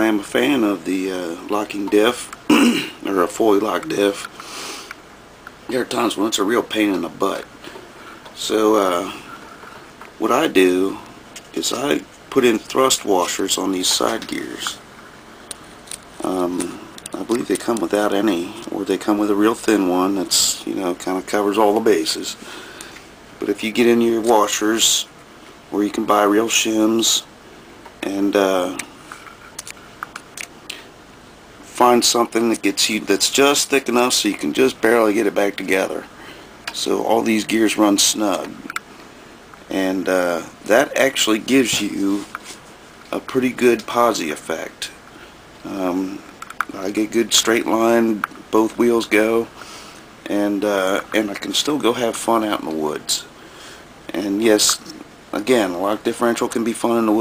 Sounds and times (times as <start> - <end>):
Speech: 0.0 - 4.3, 5.7 - 7.5, 8.4 - 9.3, 10.2 - 14.8, 16.2 - 22.4, 23.4 - 25.1, 25.7 - 27.3, 28.0 - 28.9, 31.6 - 36.1, 36.7 - 38.8, 39.7 - 42.4, 43.1 - 45.0, 45.6 - 49.5, 50.2 - 53.3, 54.1 - 57.2.